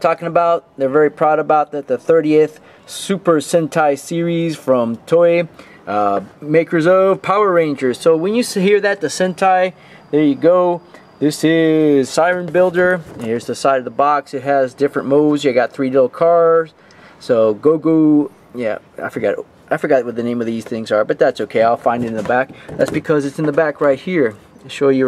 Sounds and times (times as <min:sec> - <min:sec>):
Speech: 0:00.0 - 0:25.0.